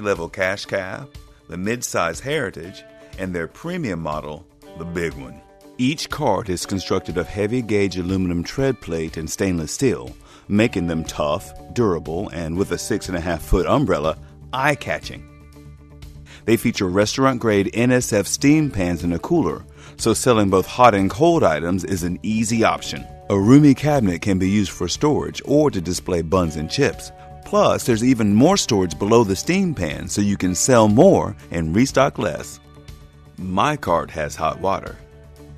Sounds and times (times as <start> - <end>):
Speech: 0.0 - 15.2, 16.4 - 32.6, 33.4 - 35.0
Music: 0.0 - 35.5.